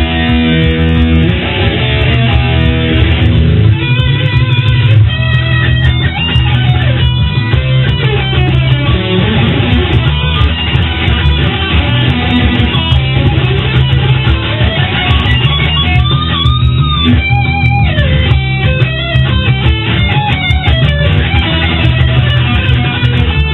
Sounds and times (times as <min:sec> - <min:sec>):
Electric guitar: 0:00.0 - 0:23.5
Strum: 0:00.0 - 0:23.5.